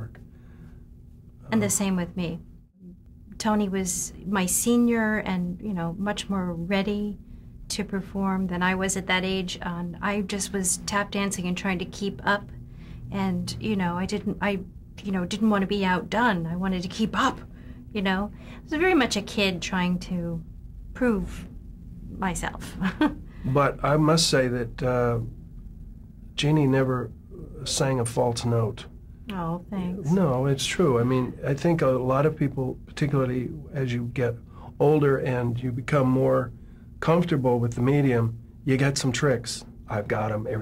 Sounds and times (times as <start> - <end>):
Inside, small room: 0.0 - 40.6.